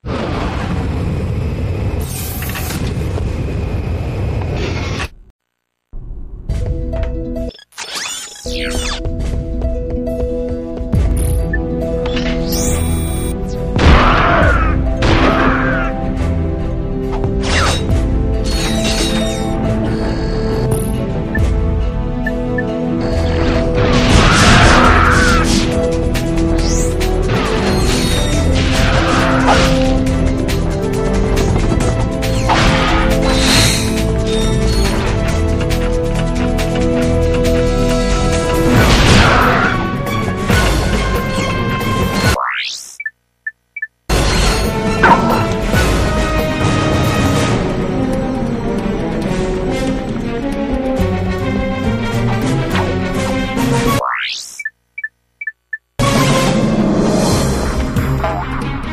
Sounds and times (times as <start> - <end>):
Music: 6.0 - 42.4, 44.1 - 54.0, 56.0 - 58.9.